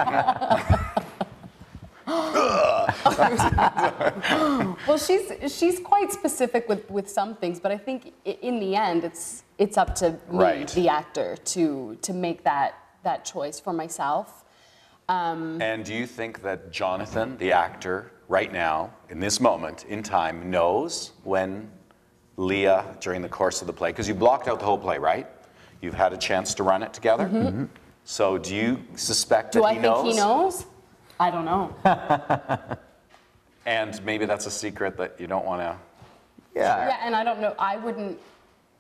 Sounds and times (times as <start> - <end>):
Speech: 9.9 - 11.0, 25.8 - 31.6, 36.6 - 38.1.